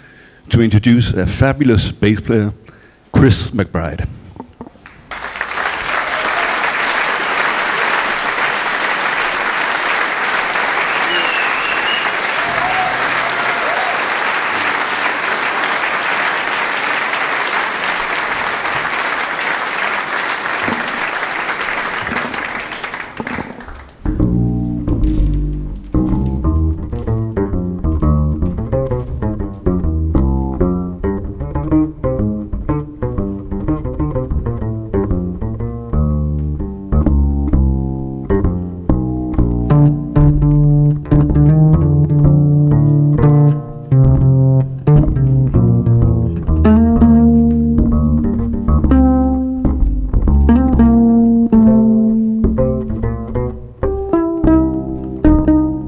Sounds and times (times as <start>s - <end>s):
Applause: 4.8s - 24.1s.